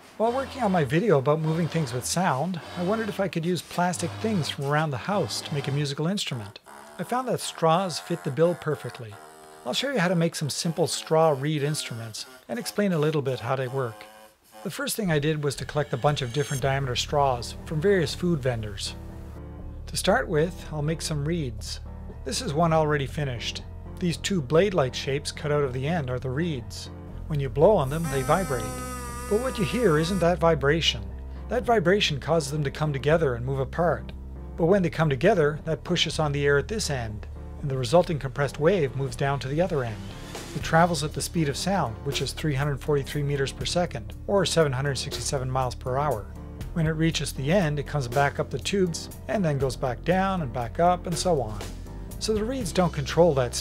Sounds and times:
Speech: 0:00.2 - 0:19.0, 0:19.9 - 0:53.6.

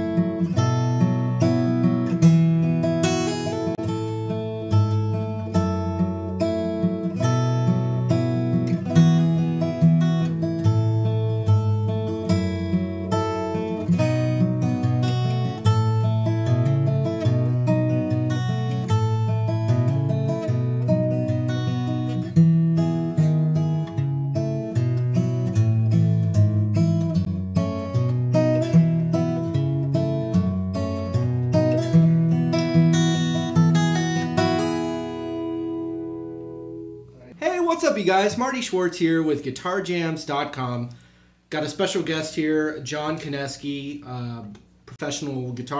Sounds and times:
Acoustic guitar: 0:00.0 - 0:45.7.

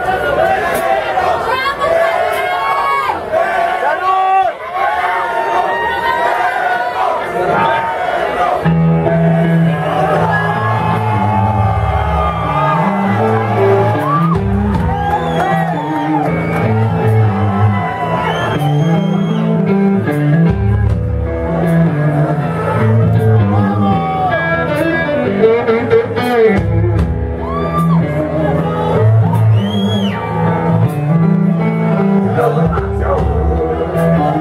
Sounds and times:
Music: 0:08.5 - 0:34.4.

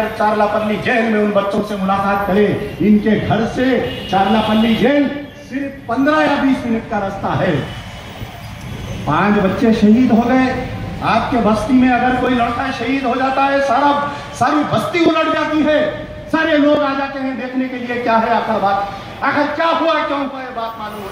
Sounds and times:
Male speech, man speaking: 0:00.0 - 0:07.7, 0:09.1 - 0:21.1
Narration, monologue: 0:00.0 - 0:21.1.

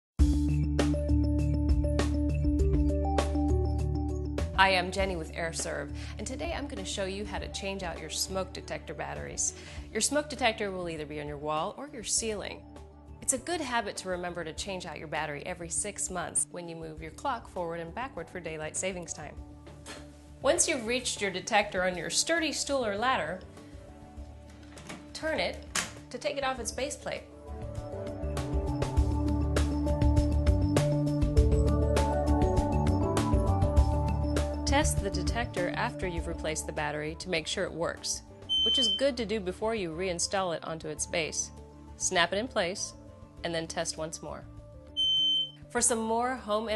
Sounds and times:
Music: 0:00.2 - 0:46.7
Speech: 0:04.6 - 0:12.6, 0:13.2 - 0:19.3, 0:20.4 - 0:23.4, 0:25.2 - 0:27.3, 0:34.7 - 0:44.5, 0:45.8 - 0:46.7
Smoke detector, smoke alarm: 0:38.5 - 0:39.1, 0:45.0 - 0:45.6.

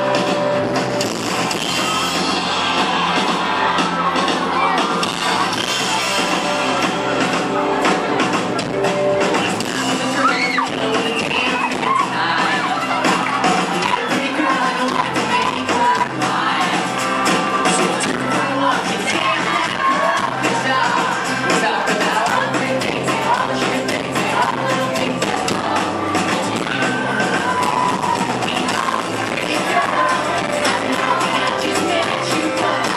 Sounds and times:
Crowd: 0:00.0 - 0:32.9.

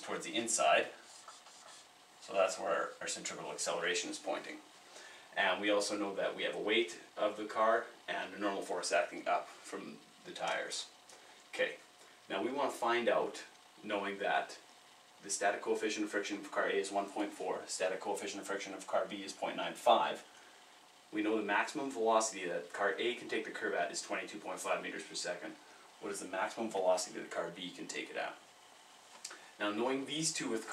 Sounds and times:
Speech: 0:00.0 - 0:01.0, 0:02.2 - 0:04.7, 0:05.4 - 0:20.3, 0:21.1 - 0:28.4, 0:29.6 - 0:30.7.

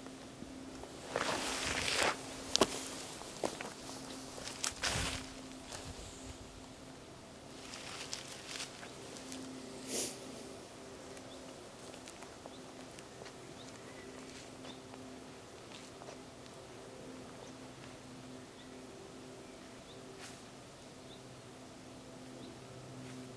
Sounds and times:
Outside, rural or natural: 0:00.0 - 0:23.3.

